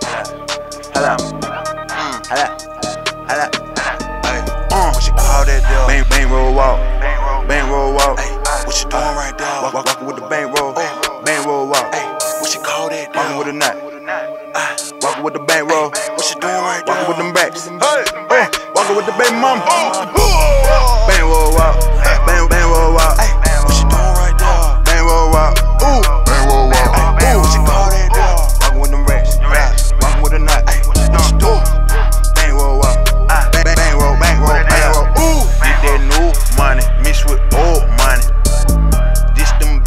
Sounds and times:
Music: 0.0s - 39.8s.

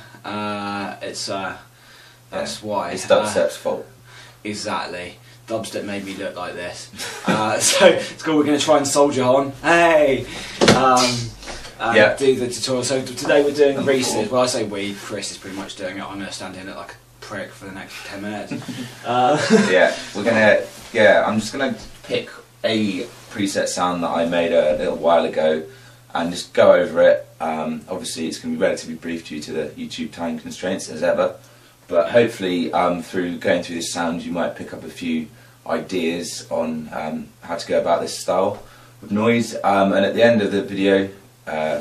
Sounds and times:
Speech: 0.2s - 1.7s, 2.3s - 41.8s.

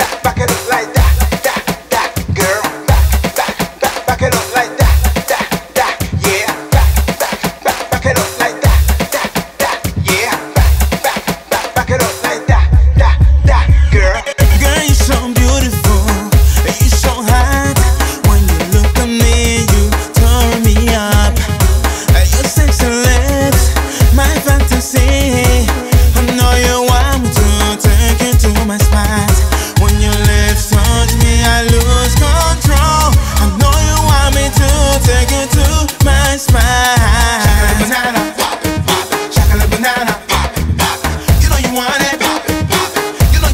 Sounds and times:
Afrobeat: 0.0s - 43.5s.

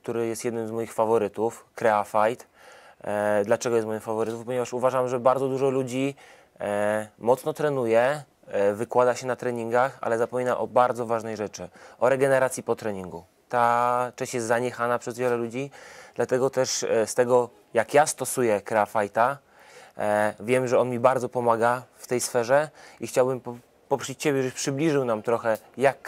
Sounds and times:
Speech: 0.0s - 19.4s, 20.0s - 26.0s.

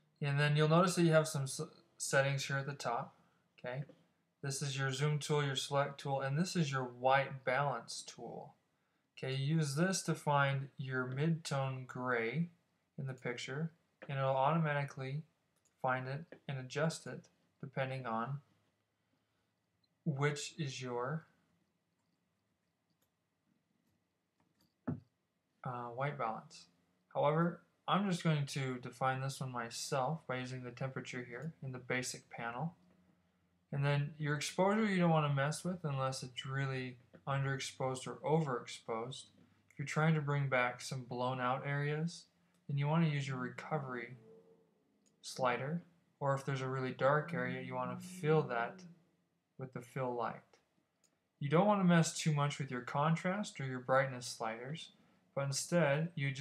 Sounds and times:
Speech: 0.2s - 8.6s, 9.2s - 18.5s, 20.1s - 21.3s, 25.6s - 32.8s, 33.7s - 44.2s, 45.2s - 48.9s, 49.6s - 50.6s, 51.4s - 56.4s.

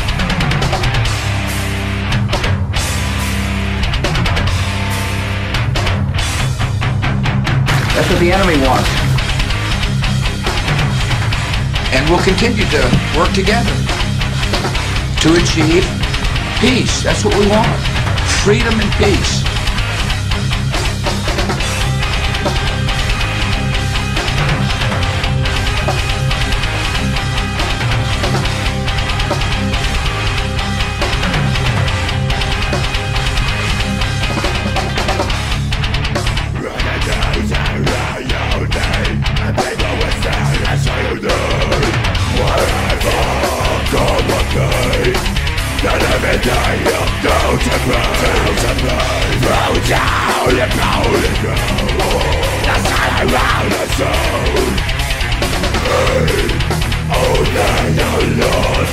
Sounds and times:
Music: 0.0s - 58.9s
Speech: 7.8s - 9.1s, 11.9s - 13.9s, 15.2s - 16.0s, 16.6s - 19.5s, 36.6s - 45.2s, 45.8s - 54.8s, 55.8s - 58.9s.

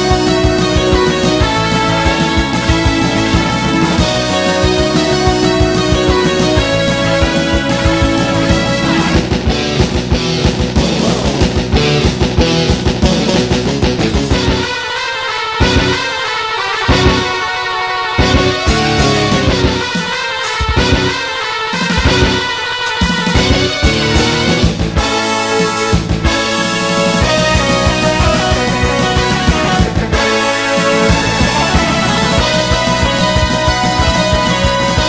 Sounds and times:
Soundtrack music: 0.0s - 35.0s
Video game music: 0.0s - 35.0s.

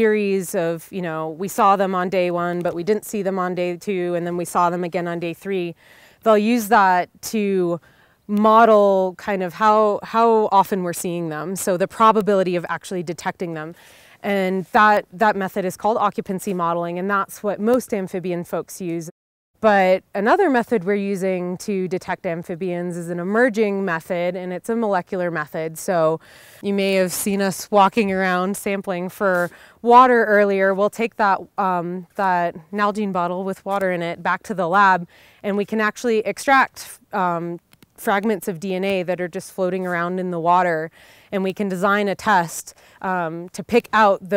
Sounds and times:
Speech: 0.0s - 44.3s.

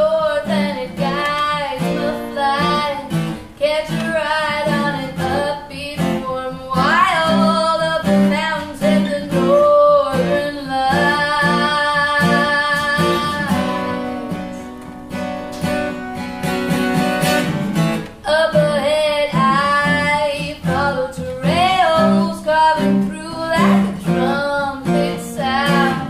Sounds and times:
Music: 0.0s - 26.1s.

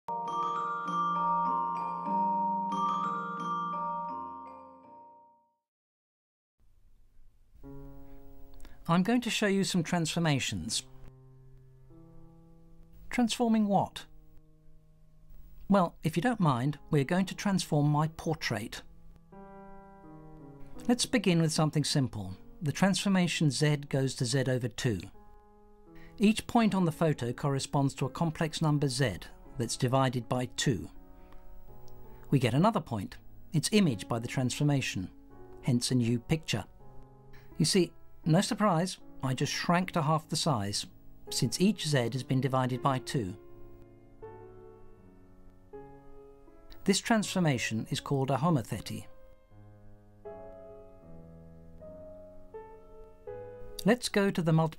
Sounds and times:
Marimba, xylophone: 0.1s - 5.3s
Glockenspiel: 0.1s - 5.6s.

